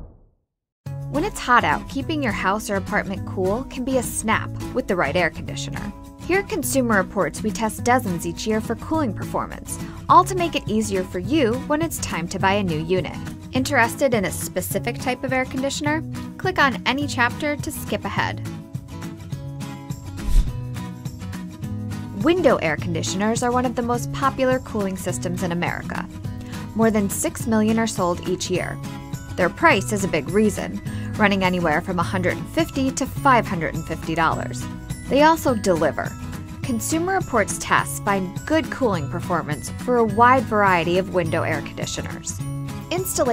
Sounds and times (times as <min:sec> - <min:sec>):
Music: 0:00.8 - 0:43.3
Speech: 0:01.2 - 0:18.4, 0:22.2 - 0:26.1, 0:26.8 - 0:28.8, 0:29.4 - 0:43.3.